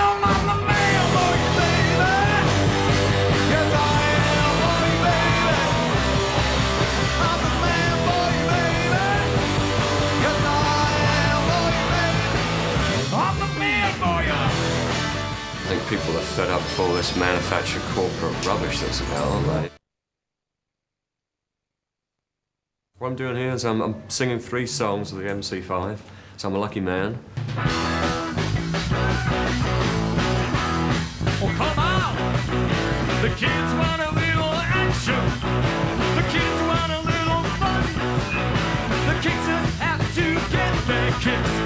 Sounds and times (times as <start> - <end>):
Music: 0.0 - 19.8, 27.3 - 41.6
Speech: 15.6 - 19.8, 23.0 - 27.3, 31.4 - 32.2.